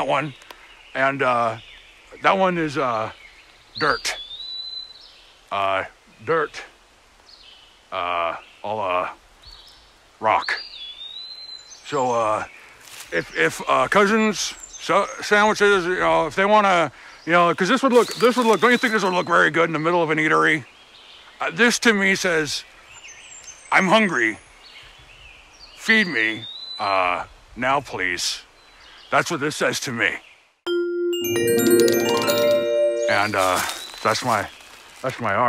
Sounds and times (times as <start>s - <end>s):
Speech: 0.0s - 0.4s, 1.0s - 1.6s, 2.2s - 3.2s, 3.8s - 4.2s, 5.5s - 6.8s, 8.0s - 9.2s, 10.2s - 10.6s, 11.9s - 12.5s, 13.1s - 20.7s, 21.4s - 22.6s, 23.7s - 24.4s, 25.8s - 28.5s, 29.1s - 30.2s, 31.6s - 35.4s
Glockenspiel: 30.7s - 34.0s.